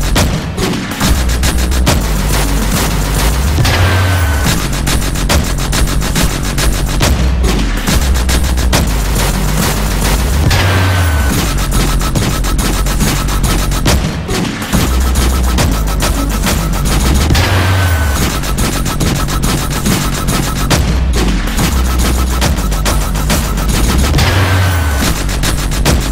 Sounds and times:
Dubstep: 0.0 - 26.1.

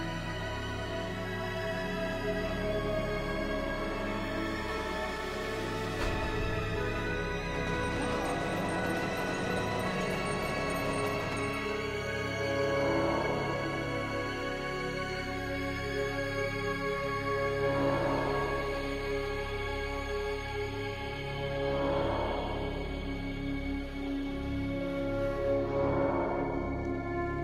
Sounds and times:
Scary music: 0.0 - 27.4.

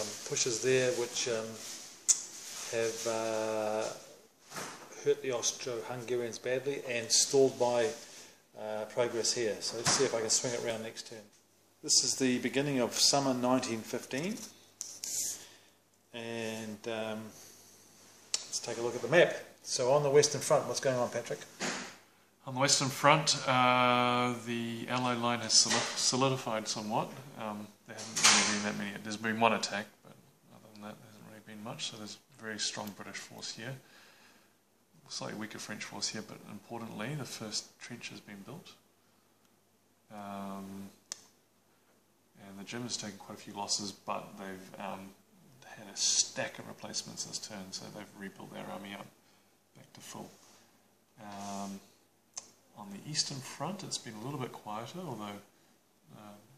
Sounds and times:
Speech: 0.0 - 1.8, 2.6 - 4.2, 4.9 - 15.4, 16.1 - 17.4, 18.4 - 21.6, 22.4 - 33.9, 35.0 - 38.8, 40.1 - 41.0, 42.4 - 49.2, 49.8 - 50.4, 51.2 - 51.9, 52.7 - 55.5, 56.1 - 56.5.

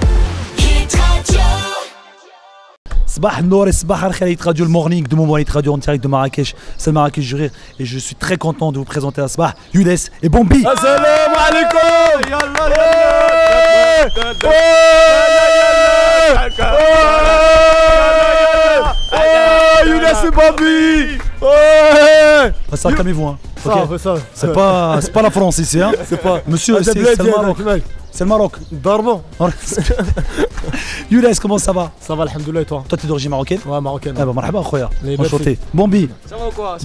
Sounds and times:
Music: 0.0 - 3.2, 10.7 - 36.8
Speech: 3.1 - 12.8, 22.4 - 29.8, 31.1 - 36.8.

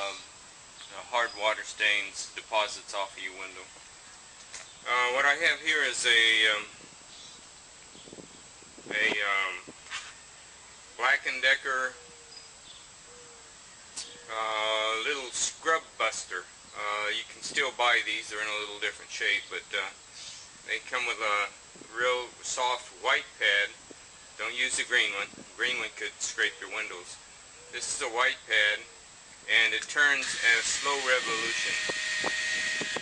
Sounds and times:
Speech: 0.0 - 0.3, 0.9 - 3.7, 4.9 - 6.8, 8.9 - 9.7, 11.0 - 12.0, 14.0 - 20.0, 20.7 - 23.8, 24.4 - 28.9, 29.5 - 31.8.

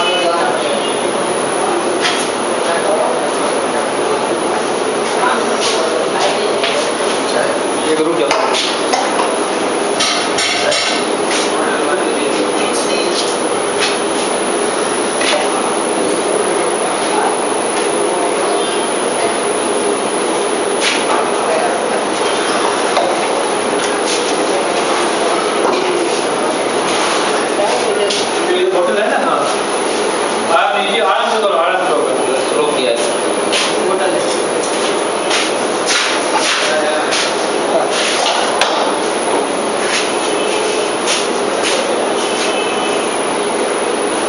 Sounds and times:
Speech: 0.0 - 8.7, 10.6 - 13.5, 27.3 - 29.6, 36.4 - 39.0.

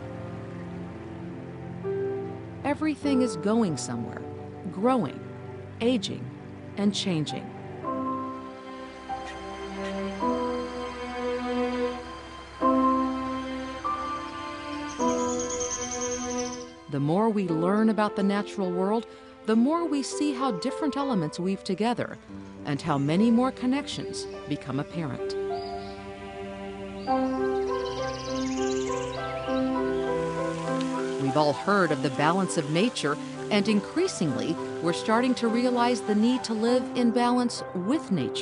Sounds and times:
Music: 0.0 - 38.4
Speech: 2.7 - 5.2, 5.8 - 7.5, 16.9 - 25.4, 31.2 - 38.4.

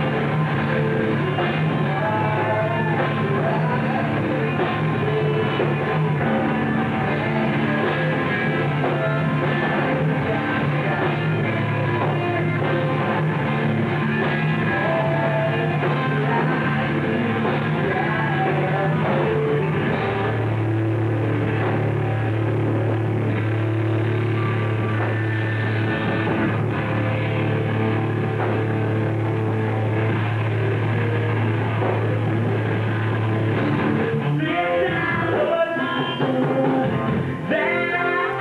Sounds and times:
Punk rock: 0.0 - 38.4.

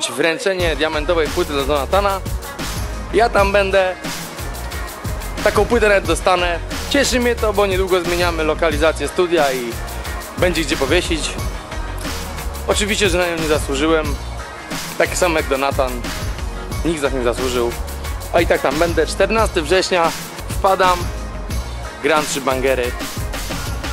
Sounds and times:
Speech: 0.0 - 2.2, 3.1 - 4.0, 5.4 - 9.8, 10.4 - 11.4, 12.7 - 14.2, 15.0 - 16.0, 16.8 - 21.1, 22.0 - 23.0
Music: 0.0 - 23.9.

